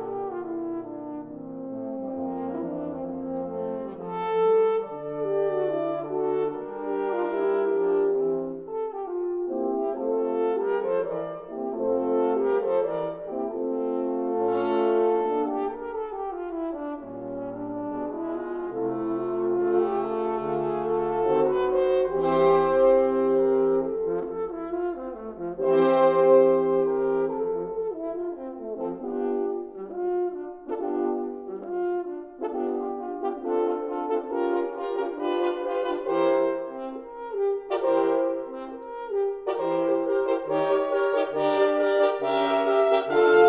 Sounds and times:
French horn: 0:00.0 - 0:43.4.

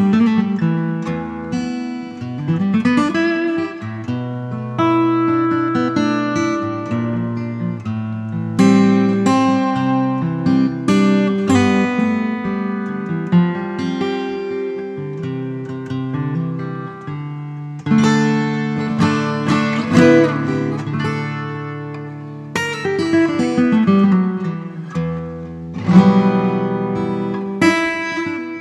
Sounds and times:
Acoustic guitar: 0:00.0 - 0:28.6
Strum: 0:00.0 - 0:28.6.

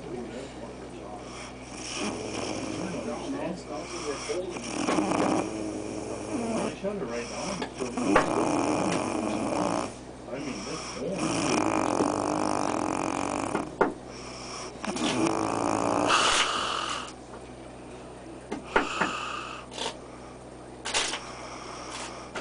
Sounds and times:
Snoring: 0:01.2 - 0:17.2, 0:18.7 - 0:20.0, 0:20.9 - 0:22.4.

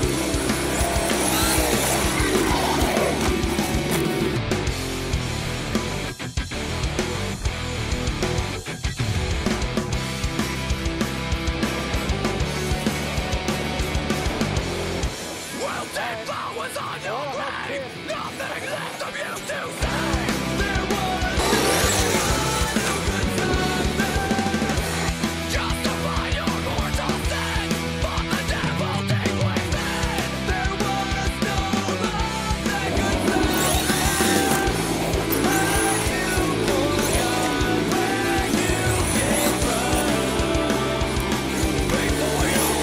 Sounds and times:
Music: 0:00.0 - 0:42.8.

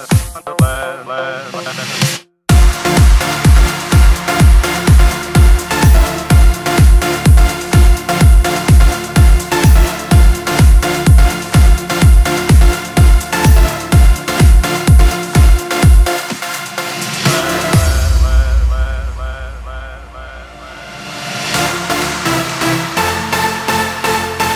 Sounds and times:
Electronic music: 0:00.0 - 0:24.5.

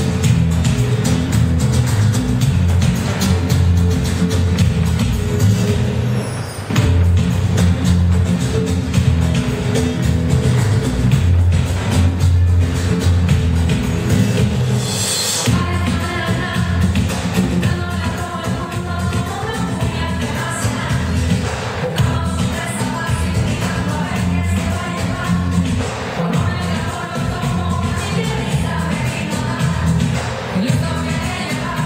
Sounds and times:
Music: 0:00.0 - 0:31.8.

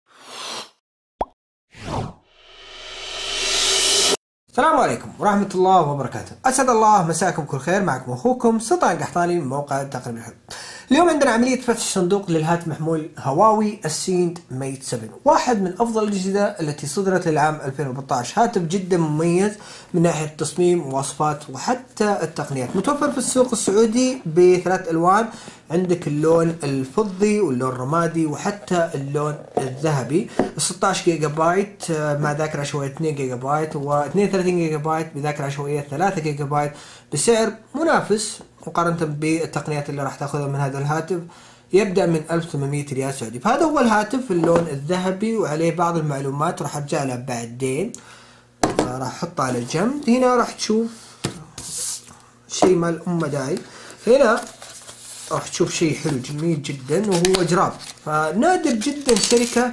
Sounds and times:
Speech: 0:04.5 - 0:48.0, 0:48.7 - 0:51.7, 0:52.5 - 0:54.6, 0:55.3 - 0:59.7.

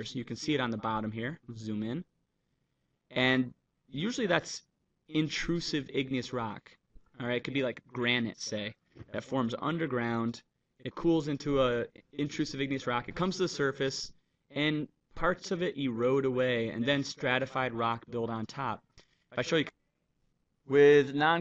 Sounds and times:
Narration, monologue: 0:00.0 - 0:21.4.

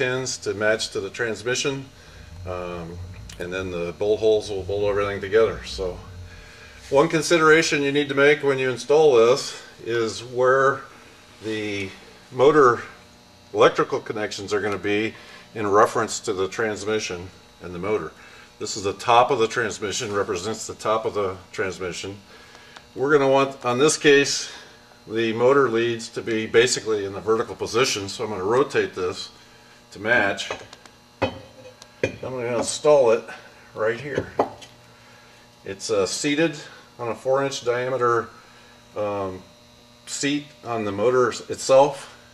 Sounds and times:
Speech: 0:00.0 - 0:06.2, 0:06.8 - 0:22.3, 0:23.0 - 0:30.7, 0:32.1 - 0:34.4, 0:35.6 - 0:39.5, 0:40.1 - 0:42.2.

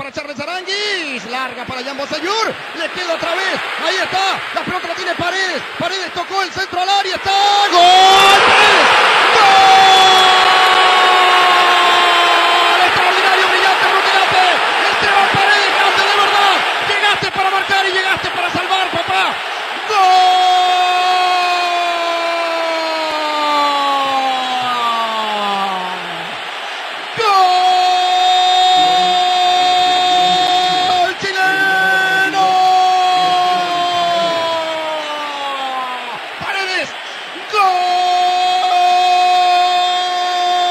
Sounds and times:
Speech: 0:00.0 - 0:08.9, 0:12.8 - 0:23.4, 0:27.2 - 0:40.7.

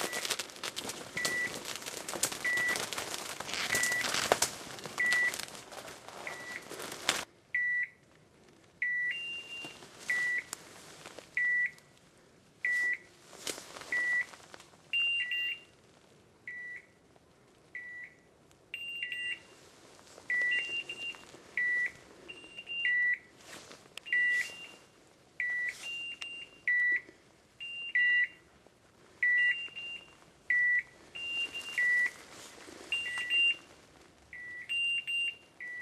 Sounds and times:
Beep, bleep: 0:01.2 - 0:01.5, 0:02.4 - 0:02.8, 0:03.7 - 0:04.1, 0:05.0 - 0:05.3, 0:06.3 - 0:06.6, 0:07.6 - 0:08.0, 0:08.8 - 0:10.5, 0:11.4 - 0:11.8, 0:13.9 - 0:14.3, 0:15.0 - 0:15.7, 0:16.5 - 0:16.9, 0:17.8 - 0:18.2, 0:18.8 - 0:19.5, 0:20.3 - 0:23.2, 0:24.1 - 0:24.8, 0:25.4 - 0:28.4, 0:29.2 - 0:32.2, 0:32.9 - 0:33.6, 0:34.4 - 0:35.8.

